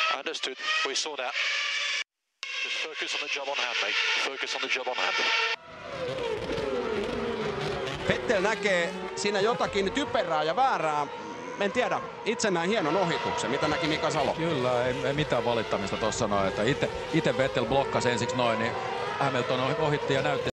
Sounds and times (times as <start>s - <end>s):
Speech: 0.0s - 1.4s, 2.8s - 5.3s, 8.1s - 20.5s.